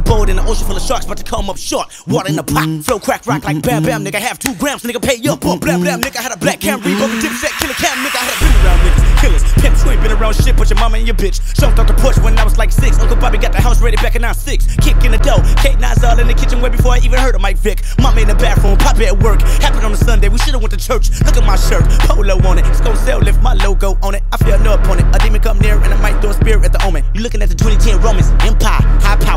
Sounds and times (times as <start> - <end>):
Music: 0.0 - 29.3.